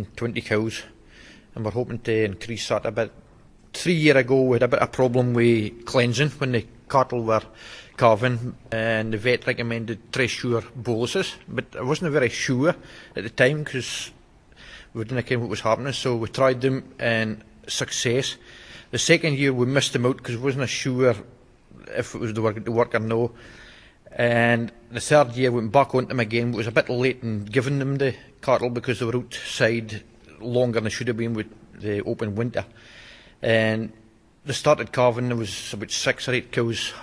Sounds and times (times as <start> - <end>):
Speech: 0.0 - 14.2, 14.9 - 23.4, 24.1 - 32.8, 33.4 - 37.0.